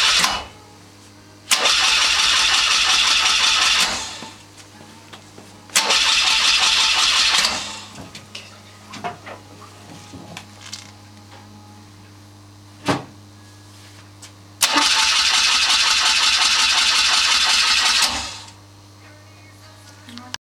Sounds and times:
Engine starting: 0:00.0 - 0:00.5, 0:01.5 - 0:04.4, 0:05.8 - 0:07.9, 0:14.6 - 0:18.6
Medium engine (mid frequency): 0:00.0 - 0:00.5, 0:01.5 - 0:04.4, 0:05.7 - 0:07.9, 0:14.6 - 0:18.6
Idling: 0:01.5 - 0:04.4, 0:05.8 - 0:08.0, 0:14.6 - 0:18.6.

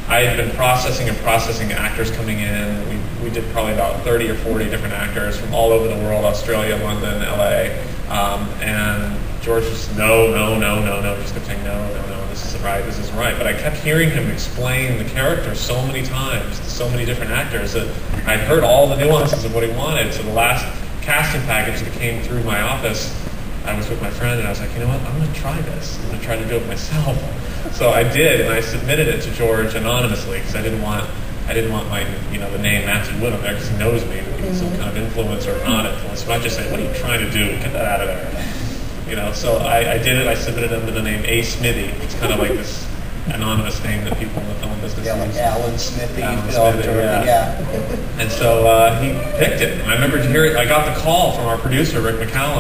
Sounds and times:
Speech: 0:00.0 - 0:52.6.

